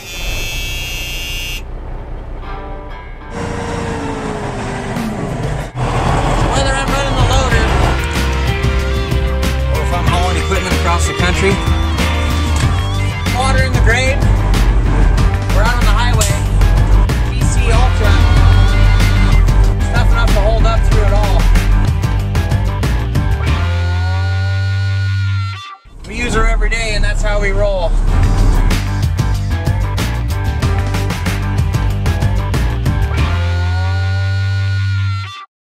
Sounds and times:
Vehicle: 0.0s - 24.9s, 25.9s - 34.8s
Music: 2.4s - 3.9s, 5.0s - 35.5s
Speech: 26.0s - 28.0s.

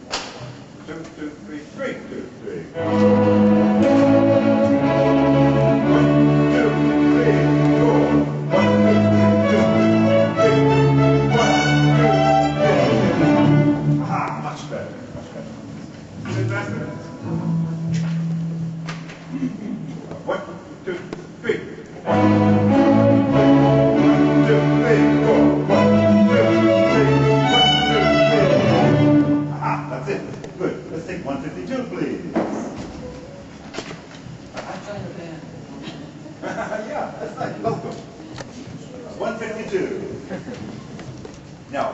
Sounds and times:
Orchestra: 2.7s - 15.2s, 16.2s - 19.2s, 22.0s - 30.2s
Speech: 14.0s - 15.5s, 16.2s - 17.1s, 29.5s - 32.4s, 36.5s - 40.2s, 41.7s - 41.9s
Guitar: 16.3s - 19.4s.

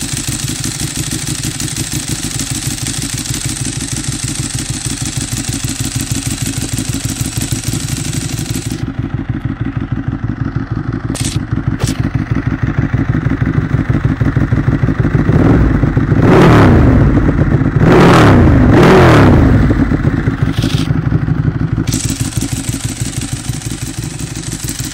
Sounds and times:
Outside, urban or manmade: 0.0s - 24.9s.

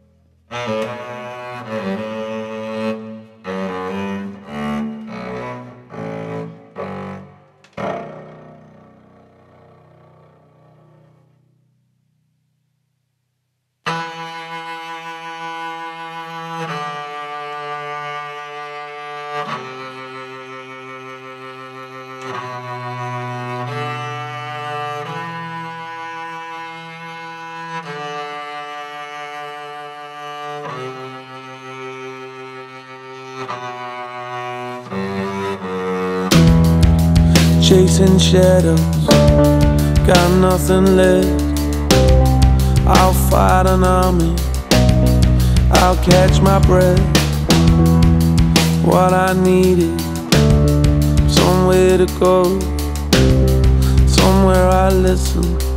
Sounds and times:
Cello: 0.0s - 11.6s, 13.8s - 55.7s
Double bass: 0.2s - 11.4s, 33.4s - 55.7s.

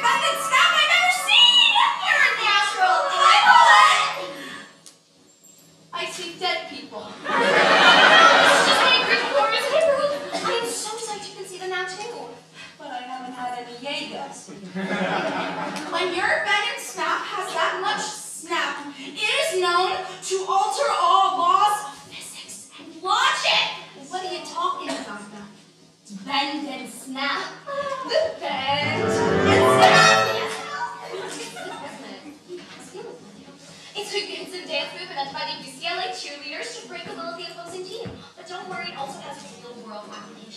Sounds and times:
Speech: 0.0s - 4.4s, 6.0s - 7.2s, 8.1s - 14.6s, 15.8s - 40.5s.

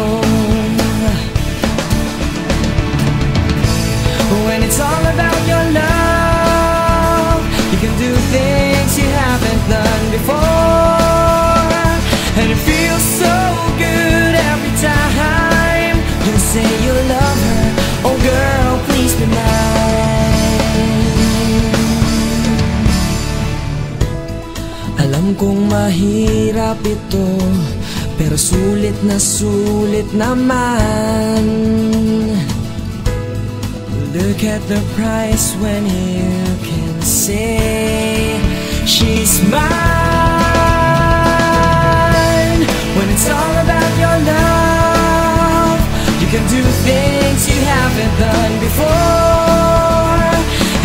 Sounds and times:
Music: 0.0s - 50.8s.

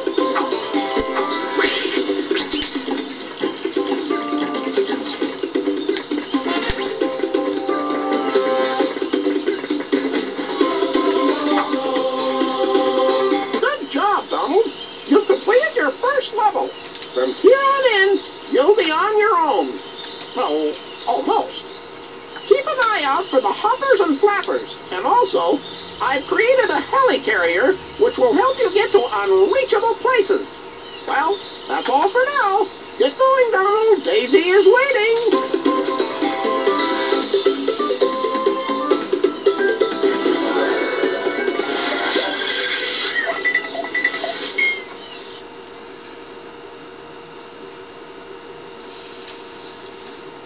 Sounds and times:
Speech: 13.6s - 19.8s, 20.4s - 21.6s, 22.4s - 30.5s, 31.1s - 35.3s.

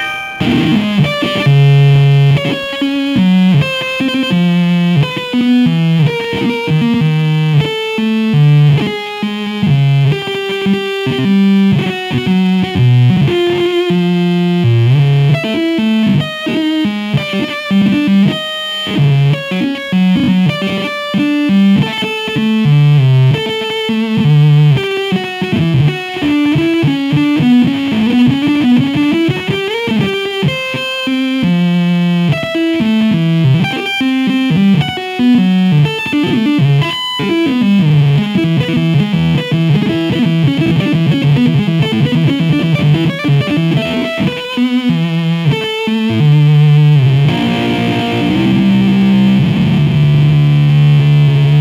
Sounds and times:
Distortion: 0.0s - 51.6s
Music: 0.0s - 51.6s.

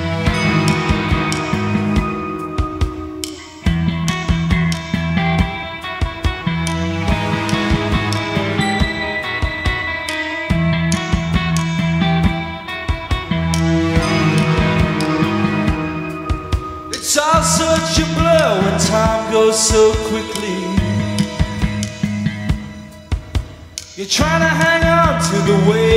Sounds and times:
Music: 0.0s - 25.9s.

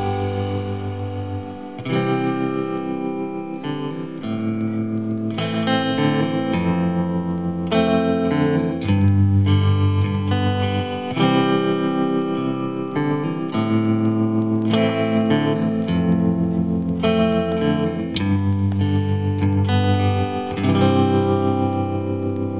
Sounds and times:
Electric guitar: 0.0s - 22.5s.

